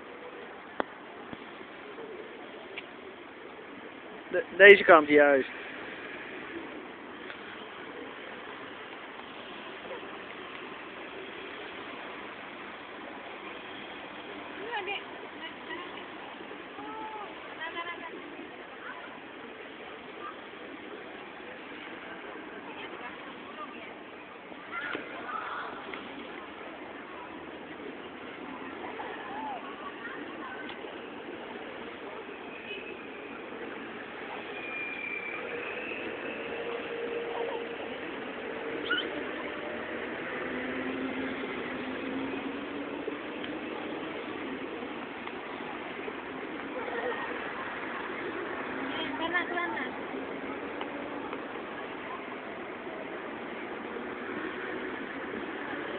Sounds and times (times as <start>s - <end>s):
Outside, urban or manmade: 0.0s - 55.9s.